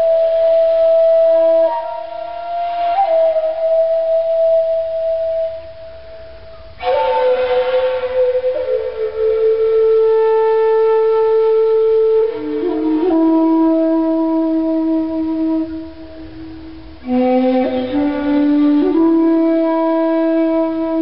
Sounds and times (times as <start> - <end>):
Music: 0.0 - 21.0.